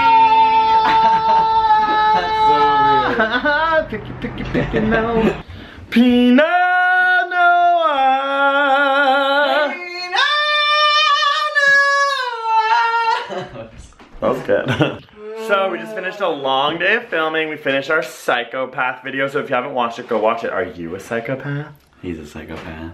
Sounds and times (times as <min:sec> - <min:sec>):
Inside, small room: 0:00.0 - 0:22.9
Speech: 0:15.3 - 0:22.9.